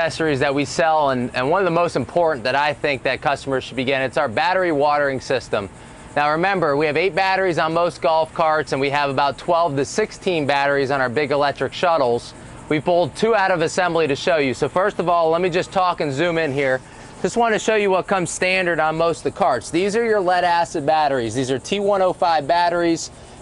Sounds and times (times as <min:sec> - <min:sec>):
Speech: 0:00.0 - 0:23.2.